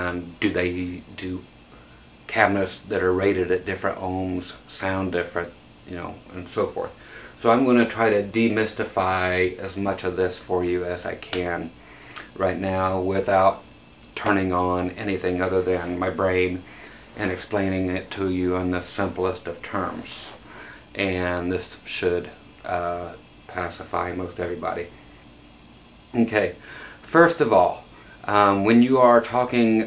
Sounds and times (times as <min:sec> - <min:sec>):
Speech: 0:00.0 - 0:01.5, 0:02.3 - 0:24.9, 0:26.1 - 0:29.8.